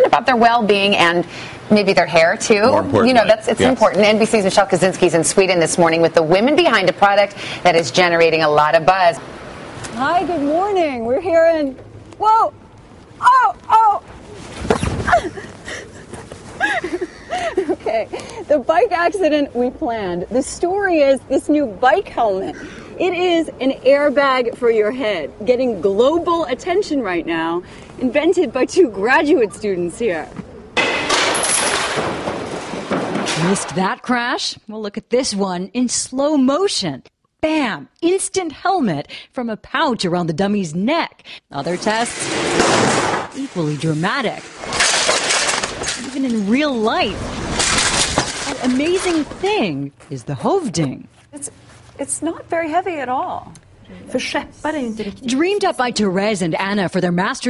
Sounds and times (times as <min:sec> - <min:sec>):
Speech: 0:02.5 - 0:04.2.